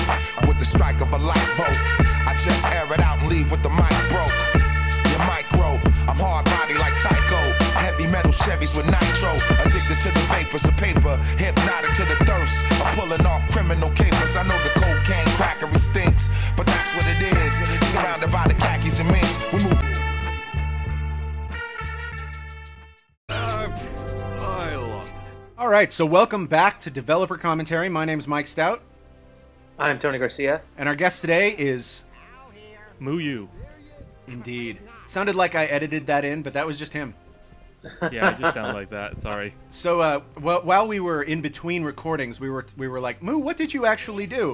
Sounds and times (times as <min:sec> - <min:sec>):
Music: 0:00.0 - 0:44.5
Speech: 0:25.6 - 0:28.8, 0:29.8 - 0:37.2, 0:38.1 - 0:44.5.